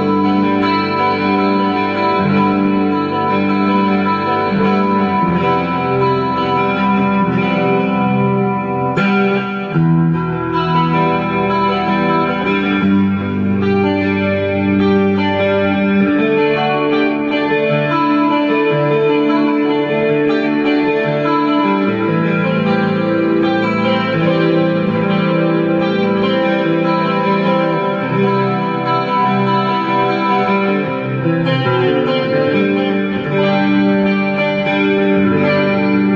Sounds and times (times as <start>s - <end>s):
Electric guitar: 0.0s - 36.1s.